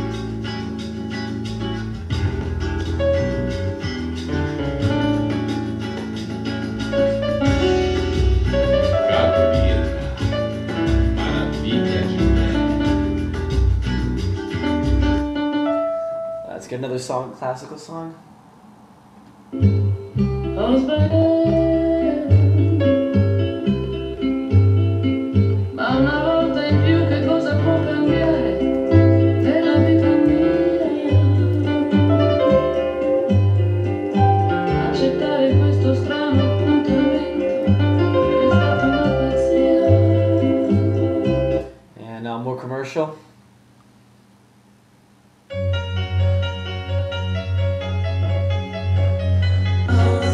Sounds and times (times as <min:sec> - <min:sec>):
Music: 0:00.0 - 0:16.8, 0:19.5 - 0:41.8, 0:45.5 - 0:50.3
Speech: 0:16.5 - 0:18.2, 0:42.0 - 0:43.3.